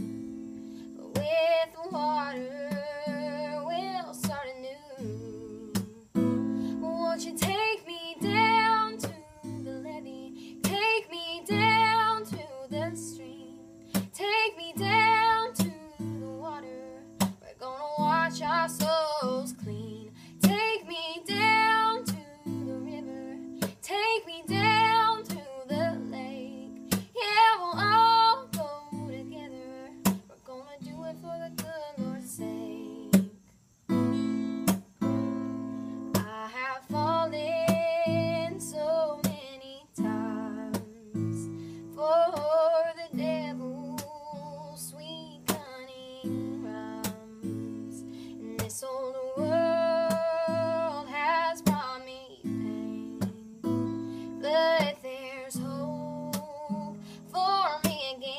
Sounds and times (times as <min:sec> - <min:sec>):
Music: 0:00.0 - 0:58.3.